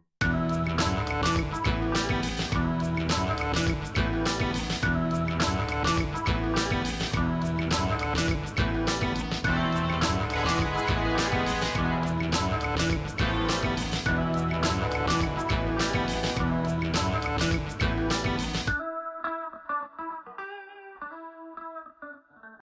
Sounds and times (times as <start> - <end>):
Music: 0.2 - 22.6.